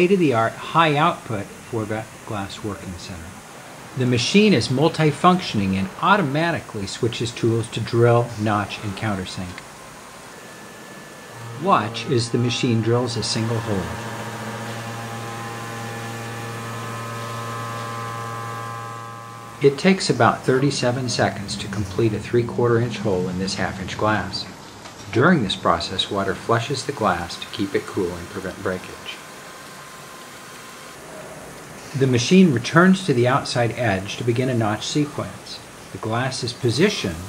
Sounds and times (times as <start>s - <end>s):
Speech: 0.0s - 3.4s, 4.0s - 9.6s, 11.6s - 14.1s, 19.6s - 29.2s, 31.9s - 37.2s.